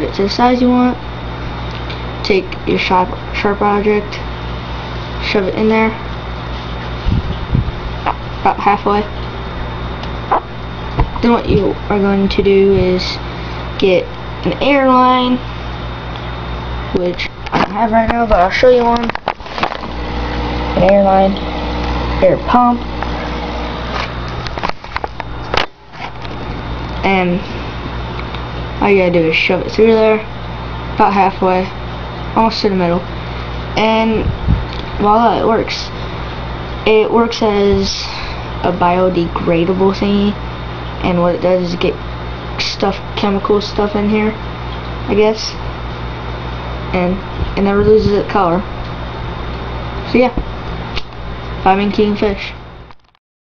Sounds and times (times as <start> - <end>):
Speech: 0.0 - 1.0, 2.2 - 4.3, 5.2 - 6.0, 8.4 - 9.1, 11.2 - 13.2, 13.8 - 15.5, 16.9 - 19.1, 20.8 - 21.4, 22.2 - 22.8, 27.0 - 27.4, 28.8 - 30.3, 31.0 - 31.8, 32.4 - 33.1, 33.8 - 34.3, 35.0 - 36.0, 36.9 - 40.4, 41.0 - 42.0, 42.6 - 44.4, 45.1 - 45.6, 46.9 - 48.7, 50.1 - 50.4, 51.6 - 52.6.